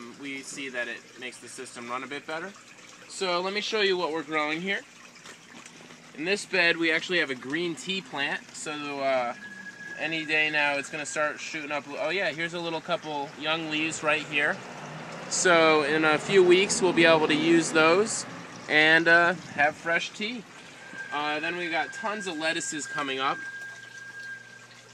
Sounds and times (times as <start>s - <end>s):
Speech: 0.0s - 4.9s, 6.2s - 9.4s, 10.0s - 14.6s, 15.3s - 20.4s, 21.2s - 23.4s.